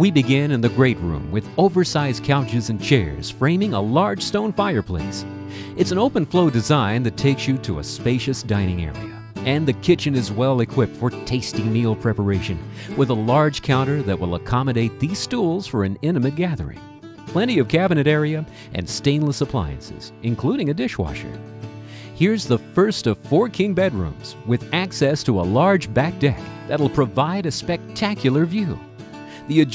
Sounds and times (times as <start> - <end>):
Speech: 0.0 - 21.4, 22.2 - 28.8, 29.4 - 29.7
Music: 0.0 - 29.7.